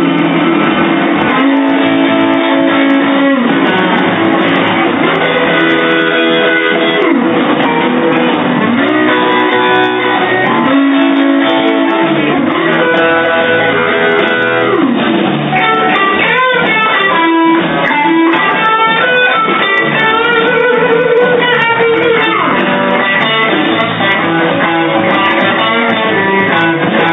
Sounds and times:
Blues: 0.0 - 27.1
Guitar: 0.0 - 27.1.

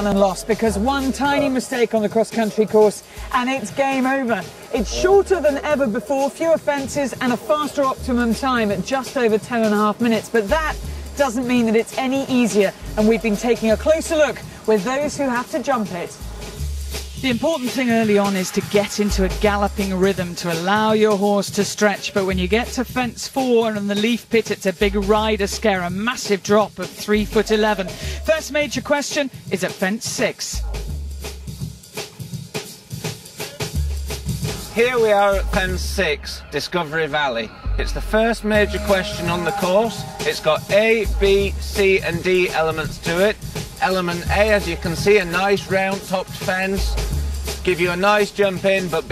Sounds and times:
Speech: 0.0 - 16.2, 17.2 - 30.6, 34.7 - 47.0, 47.6 - 49.1
Music: 0.0 - 49.1.

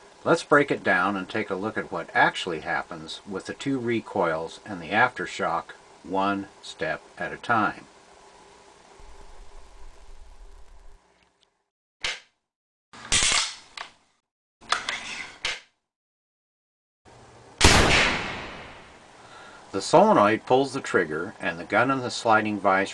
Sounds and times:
Speech: 0.2 - 7.9, 19.7 - 22.9.

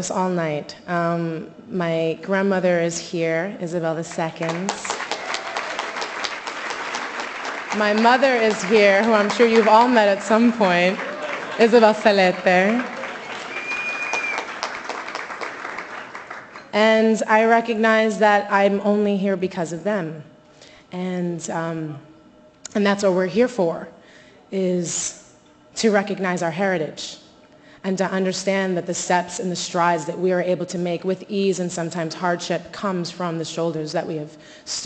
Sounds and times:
Female speech, woman speaking: 0.0 - 4.9, 7.8 - 11.0, 11.6 - 12.9, 16.8 - 20.3, 20.9 - 22.0, 22.7 - 23.9, 24.6 - 25.2, 25.8 - 27.2, 27.8 - 34.8
Narration, monologue: 0.0 - 5.0, 7.7 - 13.0, 16.6 - 34.8.

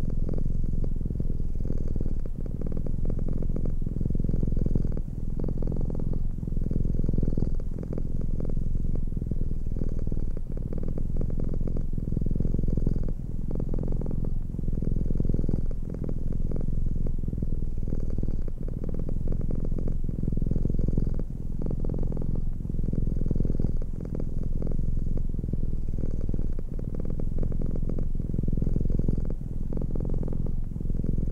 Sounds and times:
Purr: 0.0 - 31.3.

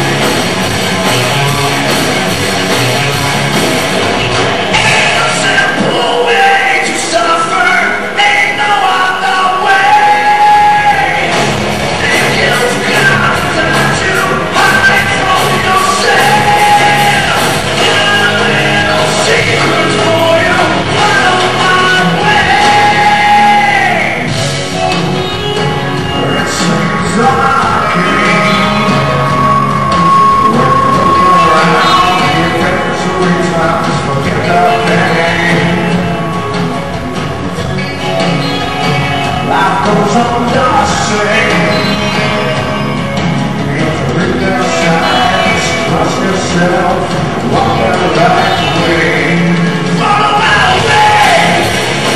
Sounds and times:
Music: 0.0 - 52.1
Speech: 4.8 - 11.3, 26.2 - 29.1, 30.4 - 35.9, 43.8 - 51.6.

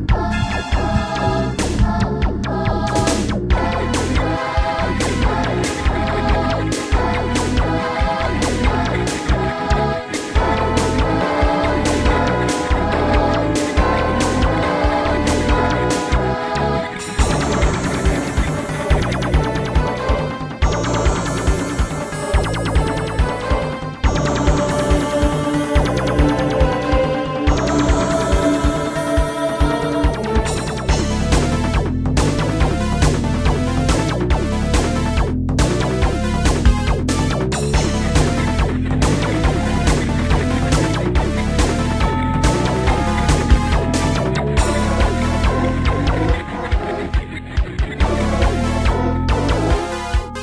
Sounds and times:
Music: 0.0 - 50.4.

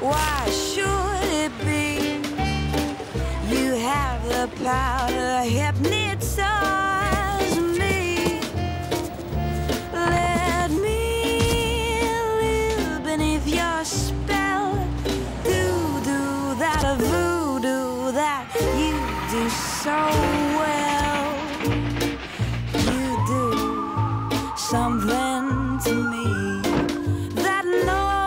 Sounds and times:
Background music: 0.0 - 28.2.

